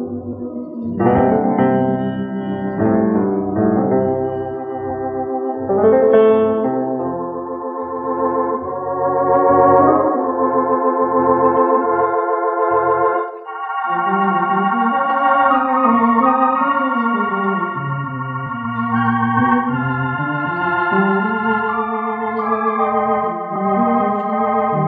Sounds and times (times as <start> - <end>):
Theremin: 0.0 - 24.8.